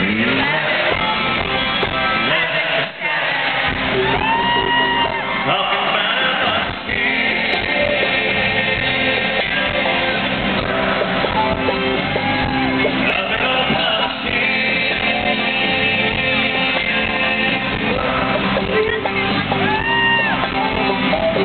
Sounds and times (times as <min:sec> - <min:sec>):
Inside, large room or hall: 0:00.0 - 0:21.4
Inside, public space: 0:00.0 - 0:21.4
Music: 0:00.0 - 0:21.4
Singing: 0:00.0 - 0:21.4.